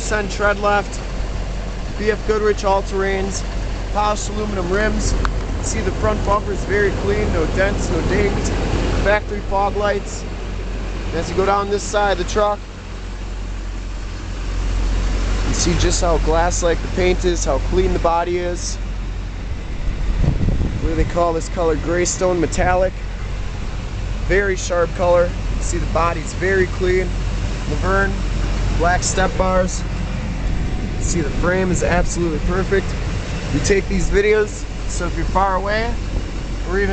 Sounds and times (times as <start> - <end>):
Speech: 0.0 - 1.0, 2.0 - 10.3, 11.1 - 12.6, 15.5 - 18.8, 20.8 - 23.0, 24.3 - 29.9, 31.0 - 36.0, 36.6 - 36.9
Truck: 0.0 - 36.9.